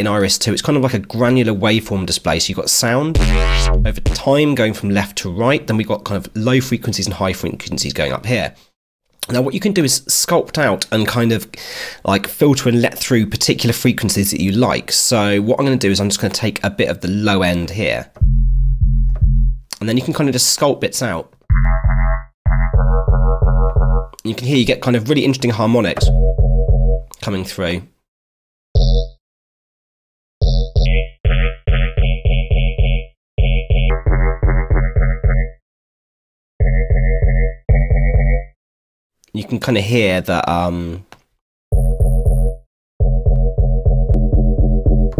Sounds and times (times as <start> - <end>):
Speech: 0.0 - 3.2, 3.8 - 8.6, 9.2 - 18.2, 19.8 - 21.3, 24.2 - 26.1, 27.2 - 28.0, 39.3 - 41.1
Electronic music: 3.2 - 4.3, 33.9 - 35.6, 43.0 - 45.1.